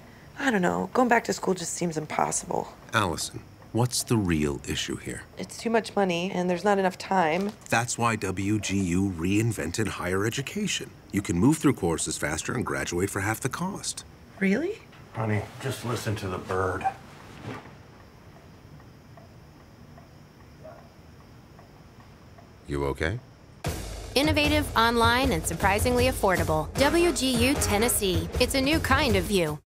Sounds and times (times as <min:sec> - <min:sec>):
Music: 0:23.6 - 0:29.6.